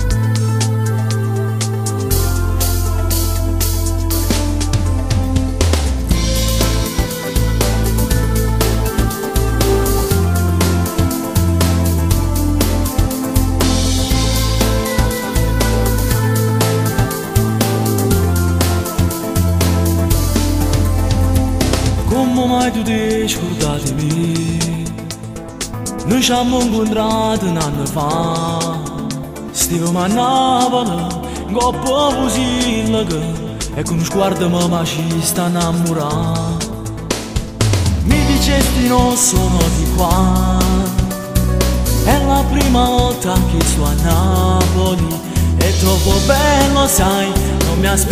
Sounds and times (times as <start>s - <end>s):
Music: 0.0s - 48.1s.